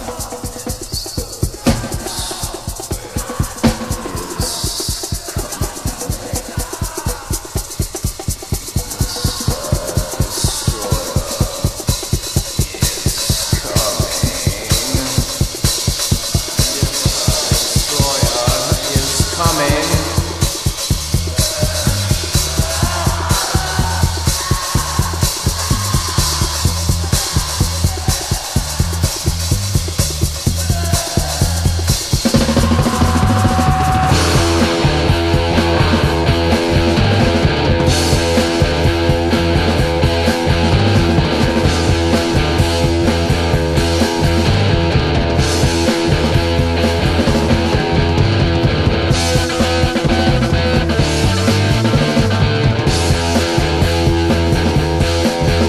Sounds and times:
Music: 0:00.0 - 0:55.6
Speech: 0:16.4 - 0:20.4.

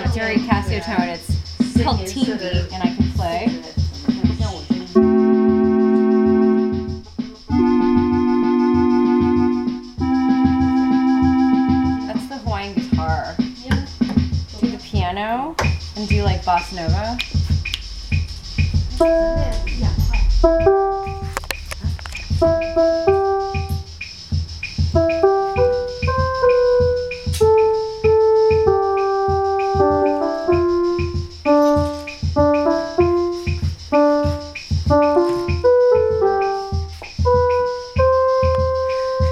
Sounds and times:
Speech: 0:00.0 - 0:05.1, 0:12.1 - 0:17.2, 0:19.4 - 0:20.3
Keyboard (musical): 0:00.0 - 0:14.8, 0:15.7 - 0:39.3.

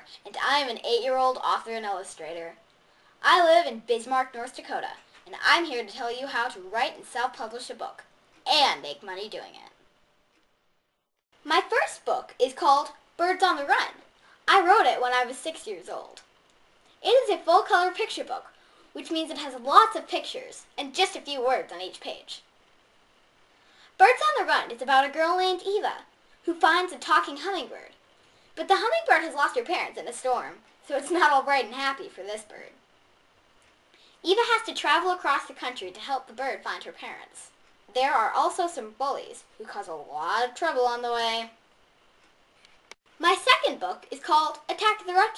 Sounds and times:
Speech: 0:00.0 - 0:02.6, 0:03.2 - 0:09.8, 0:11.4 - 0:16.3, 0:17.0 - 0:22.5, 0:24.0 - 0:28.0, 0:28.6 - 0:32.8, 0:34.2 - 0:41.6, 0:43.2 - 0:45.3.

